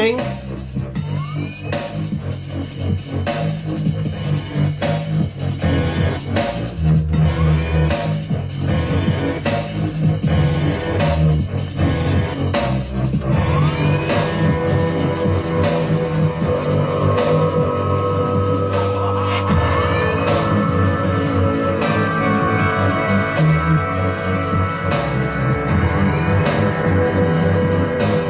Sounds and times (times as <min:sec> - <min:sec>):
Drum and bass: 0:00.0 - 0:28.2
Dubstep: 0:00.0 - 0:28.2
House music: 0:00.0 - 0:28.2.